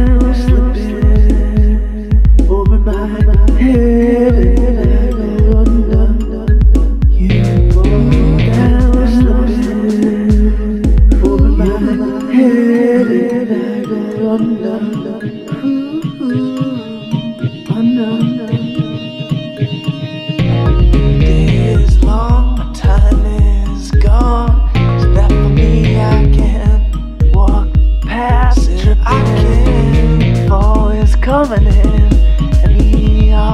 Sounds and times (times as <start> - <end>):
Guitar: 0.0 - 33.5.